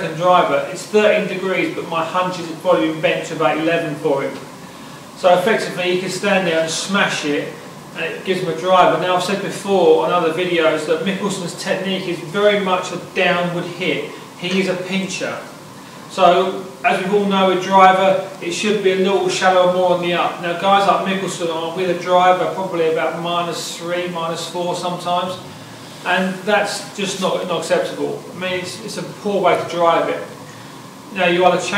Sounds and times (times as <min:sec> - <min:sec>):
Speech: 0:00.0 - 0:04.5, 0:05.2 - 0:30.4, 0:31.1 - 0:31.7.